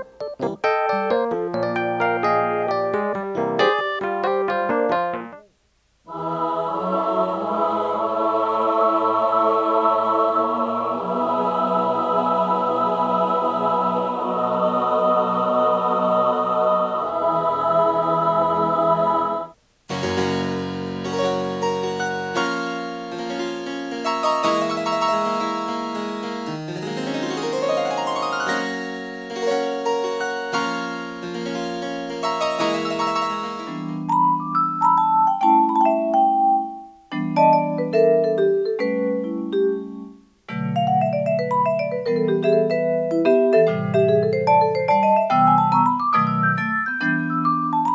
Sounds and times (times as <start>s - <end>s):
Electric piano: 0.0s - 5.5s, 19.9s - 47.9s.